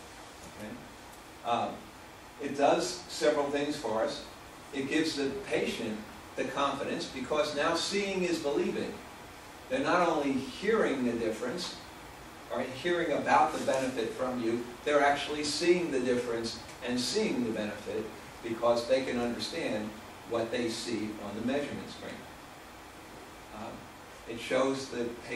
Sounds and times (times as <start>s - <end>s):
Narration, monologue: 0.0s - 25.3s
Male speech, man speaking: 0.6s - 0.8s, 1.5s - 1.8s, 2.4s - 9.0s, 9.7s - 11.8s, 12.5s - 22.2s, 23.5s - 25.3s.